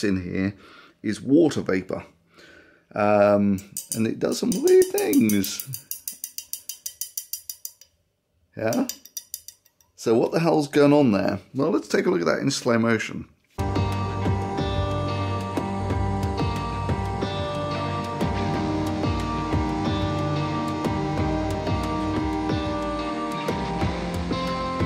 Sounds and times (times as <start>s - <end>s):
Speech: 0.0s - 2.2s, 2.9s - 5.8s, 8.6s - 9.0s, 10.0s - 13.4s.